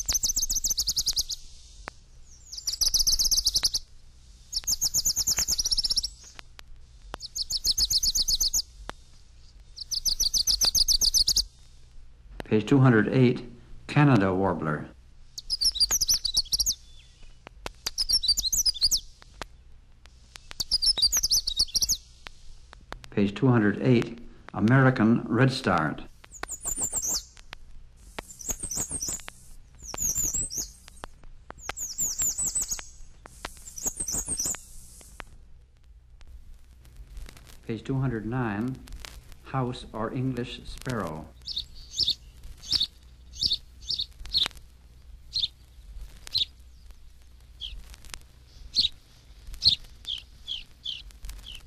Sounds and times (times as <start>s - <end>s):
Bird vocalization, bird call, bird song: 0.0s - 6.4s, 7.1s - 8.8s, 9.4s - 11.7s, 15.3s - 19.7s, 20.4s - 22.2s, 26.3s - 27.4s, 28.2s - 35.0s, 40.9s - 44.6s, 45.3s - 47.8s, 48.4s - 49.0s, 49.6s - 51.6s
Speech: 12.4s - 15.0s, 23.1s - 26.1s, 37.6s - 41.4s.